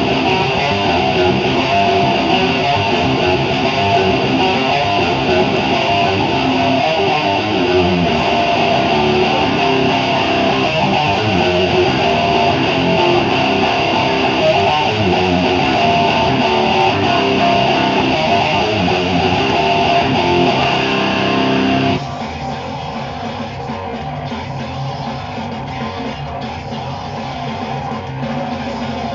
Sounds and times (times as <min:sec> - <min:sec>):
Strum: 0:00.0 - 0:22.0
Bass guitar: 0:00.0 - 0:29.1
Electric guitar: 0:00.0 - 0:29.1.